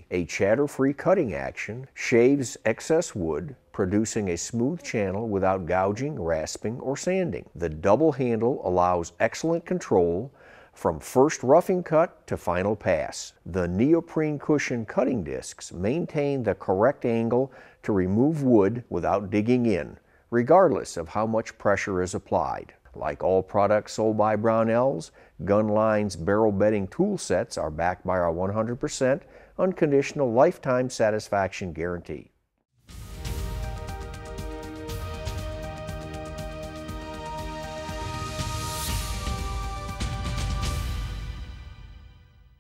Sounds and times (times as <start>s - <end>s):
Speech: 0.0s - 32.3s
Music: 32.8s - 42.6s.